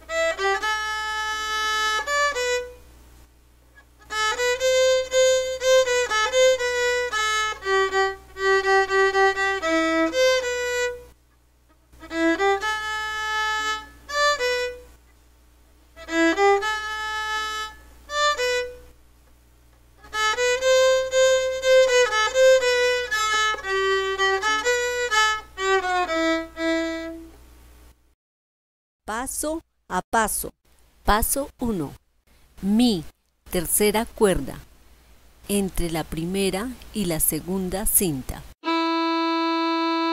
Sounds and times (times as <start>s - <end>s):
Violin, fiddle: 0.0s - 2.8s, 4.0s - 11.1s, 12.0s - 14.9s, 16.0s - 18.8s, 20.0s - 27.4s, 38.6s - 40.1s.